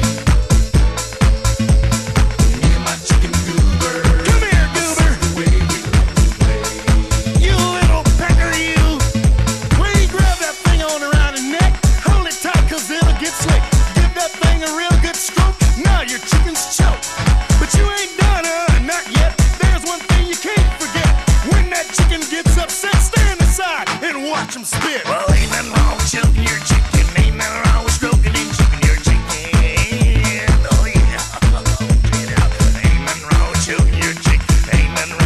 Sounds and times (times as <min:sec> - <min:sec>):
Music: 0:00.0 - 0:35.2.